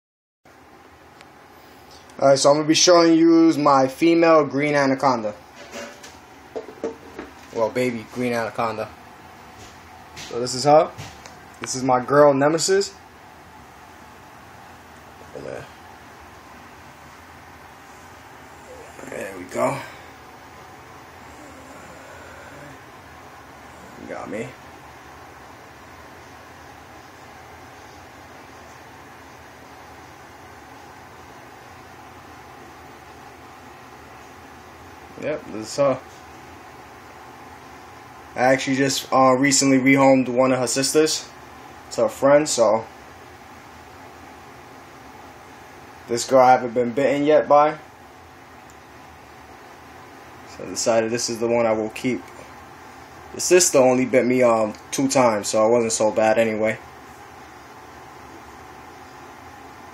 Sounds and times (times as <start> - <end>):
Inside, small room: 0.5 - 59.9
Speech: 2.2 - 5.4, 7.5 - 9.0, 10.2 - 11.0, 11.6 - 13.0, 15.3 - 15.7, 18.8 - 20.0, 24.0 - 24.6, 35.2 - 36.1, 38.4 - 42.9, 46.1 - 47.9, 50.5 - 52.4, 53.4 - 56.8.